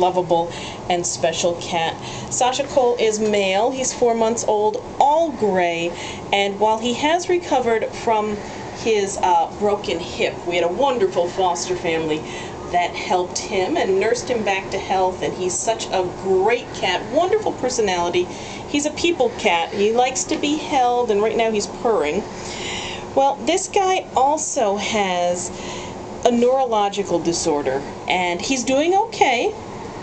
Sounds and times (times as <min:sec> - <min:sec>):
Speech: 0:00.0 - 0:22.2, 0:23.2 - 0:25.6, 0:26.2 - 0:29.6.